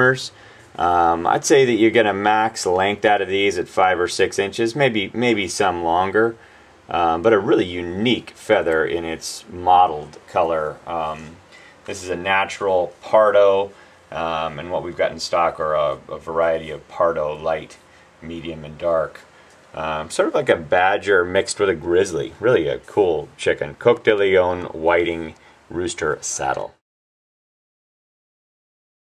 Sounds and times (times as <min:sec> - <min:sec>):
Speech: 0:00.0 - 0:26.8.